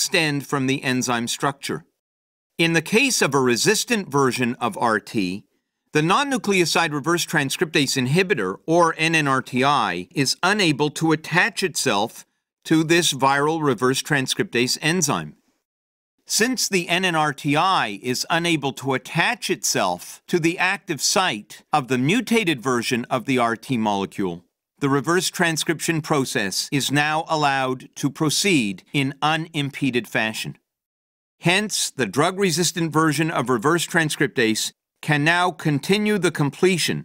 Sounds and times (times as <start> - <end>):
Speech: 0.0 - 2.0, 2.6 - 15.4, 16.3 - 30.6, 31.4 - 37.0.